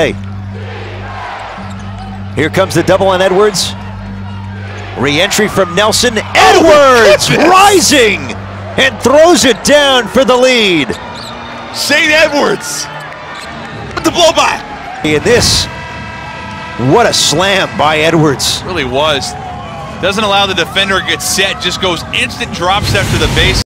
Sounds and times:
Speech: 0:20.0 - 0:23.6.

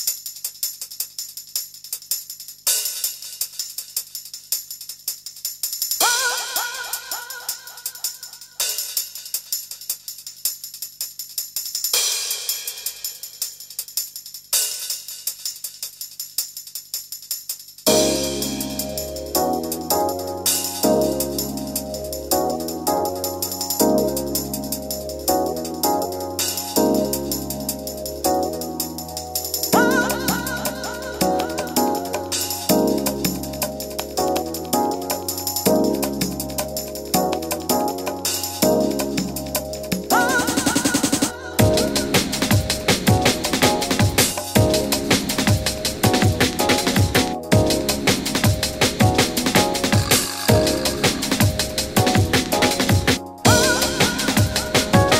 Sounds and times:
Funk: 0:29.6 - 0:55.1.

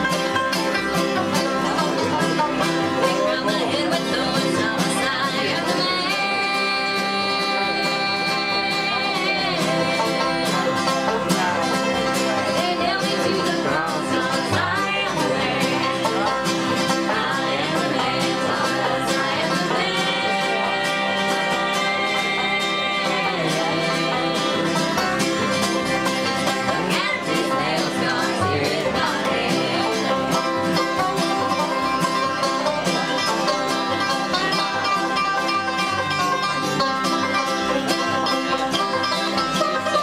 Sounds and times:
Banjo: 0:00.0 - 0:40.0
Bluegrass: 0:00.0 - 0:40.0
Guitar: 0:00.0 - 0:40.0
Singing: 0:02.9 - 0:30.7.

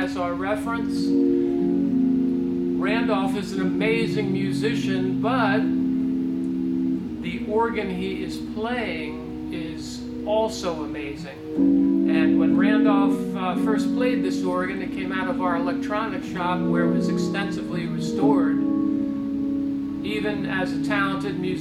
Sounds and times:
Speech: 0:00.0 - 0:01.2, 0:02.8 - 0:05.7, 0:07.2 - 0:11.4, 0:12.1 - 0:18.6, 0:20.0 - 0:21.6
Organ: 0:00.0 - 0:21.6.

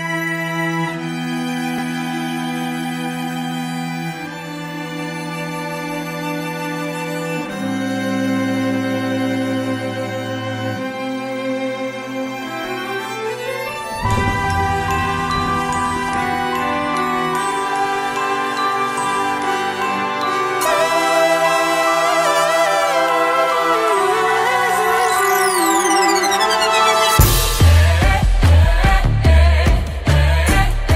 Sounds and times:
Background music: 0:00.0 - 0:30.9.

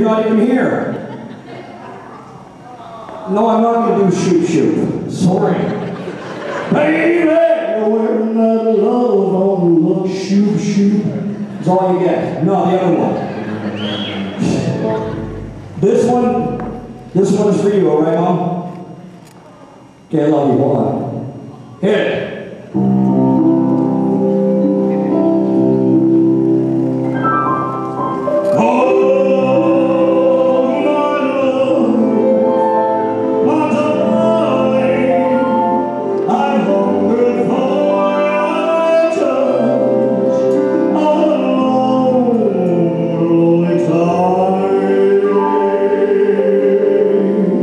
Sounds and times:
Speech: 0:01.7 - 0:05.8, 0:10.0 - 0:13.3, 0:19.4 - 0:22.4
Music: 0:13.5 - 0:17.8, 0:22.6 - 0:47.6.

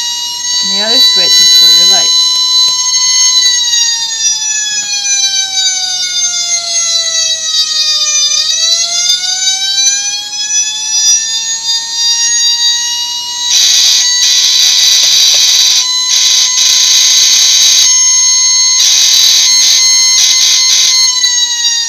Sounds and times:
Fire engine, fire truck (siren): 0:00.0 - 0:21.8
Inside, small room: 0:00.0 - 0:21.8.

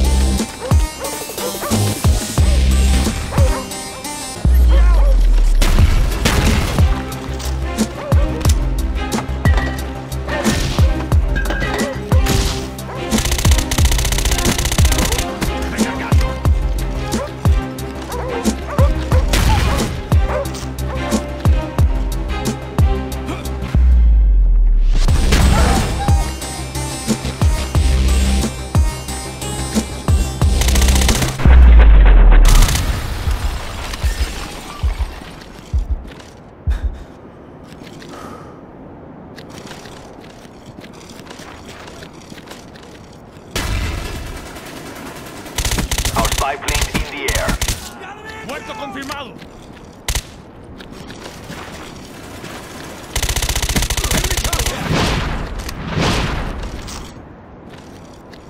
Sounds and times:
Music: 0:00.0 - 0:32.8
Outside, urban or manmade: 0:00.0 - 0:58.5.

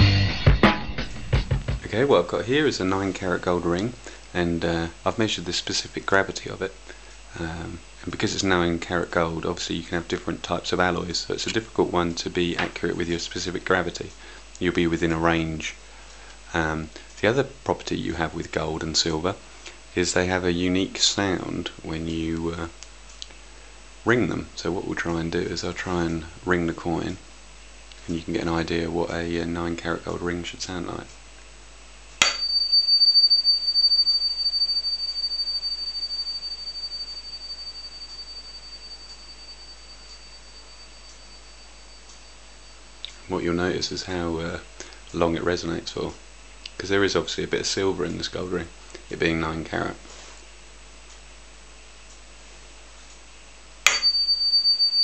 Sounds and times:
Speech: 0:01.8 - 0:15.8, 0:16.5 - 0:22.8, 0:24.0 - 0:27.2, 0:28.0 - 0:31.2, 0:43.1 - 0:50.1
Ping: 0:32.2 - 0:42.4, 0:53.9 - 0:55.0.

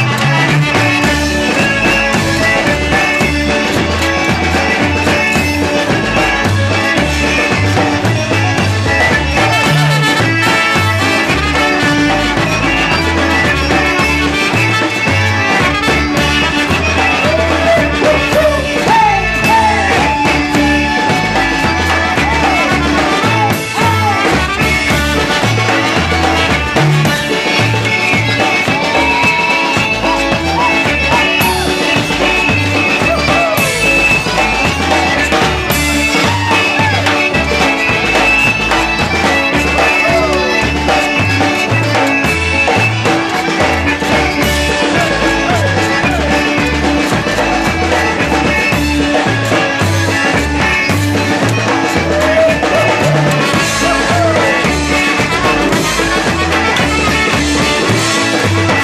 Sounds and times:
Music: 0:00.0 - 0:58.8.

